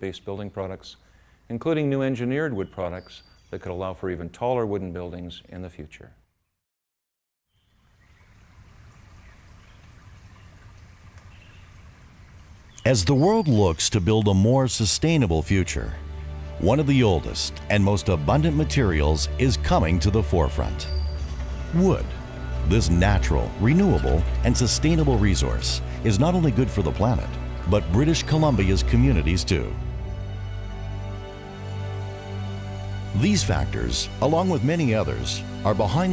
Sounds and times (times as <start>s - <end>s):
Speech: 0.0s - 6.2s, 12.8s - 16.0s, 16.6s - 20.9s, 21.7s - 29.8s, 33.2s - 36.1s
Outside, rural or natural: 7.5s - 36.1s.